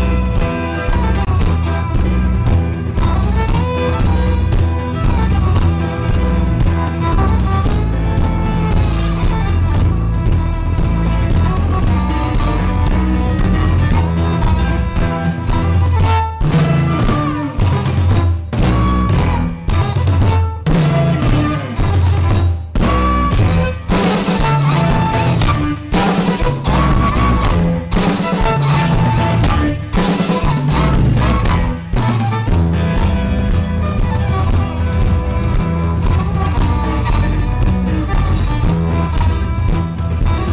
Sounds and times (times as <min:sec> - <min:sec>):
Violin, fiddle: 0:00.0 - 0:40.5.